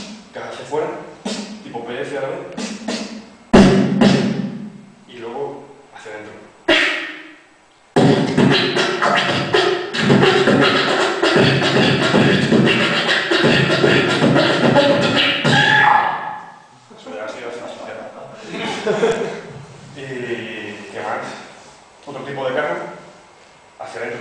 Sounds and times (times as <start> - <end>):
Beatboxing: 0.0 - 0.4, 1.1 - 1.8, 2.4 - 4.5, 6.7 - 7.3, 8.0 - 16.5
Speech: 0.4 - 1.1, 1.7 - 2.5, 5.1 - 6.5, 16.9 - 18.8, 20.0 - 23.1, 23.8 - 24.2.